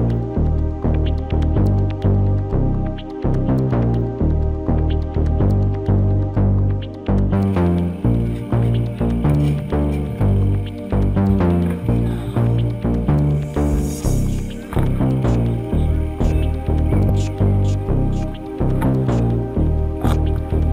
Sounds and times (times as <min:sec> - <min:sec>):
Music: 0:00.0 - 0:20.7.